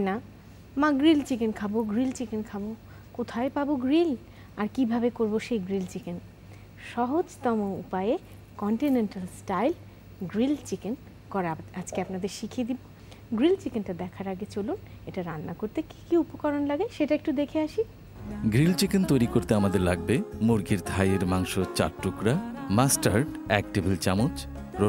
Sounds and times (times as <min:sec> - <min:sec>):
Speech: 0:00.8 - 0:06.2, 0:06.8 - 0:24.8
Music: 0:18.2 - 0:24.8.